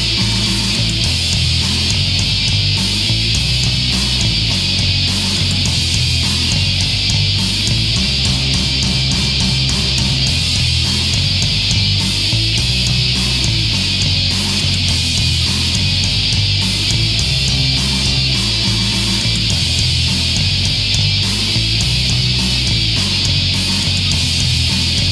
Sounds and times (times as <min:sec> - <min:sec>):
Heavy metal: 0:00.0 - 0:25.1
Punk rock: 0:00.0 - 0:25.1.